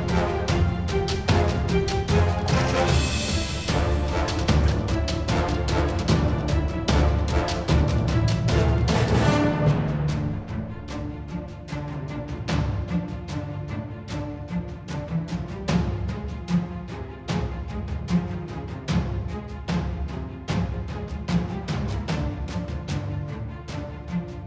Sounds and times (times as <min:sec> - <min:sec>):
Music: 0:00.0 - 0:24.4.